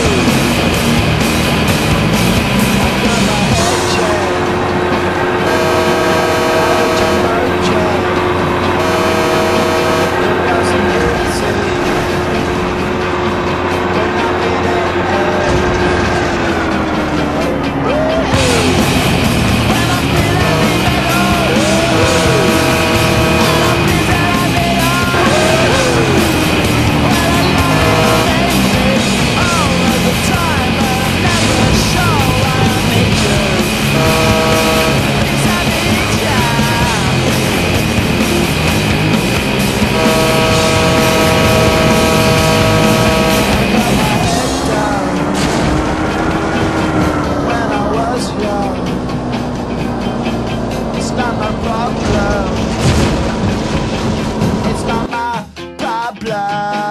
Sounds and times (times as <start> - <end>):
Vehicle: 0.0 - 55.1
Music: 0.0 - 56.9.